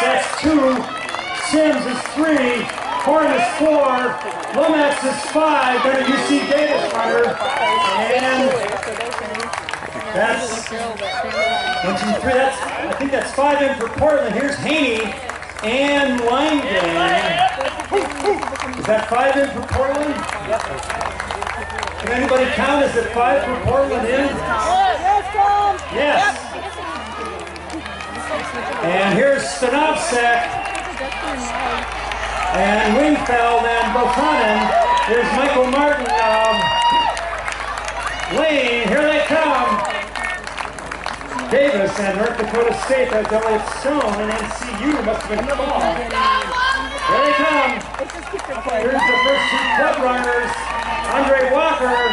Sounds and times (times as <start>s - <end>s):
Run: 0.0s - 52.1s.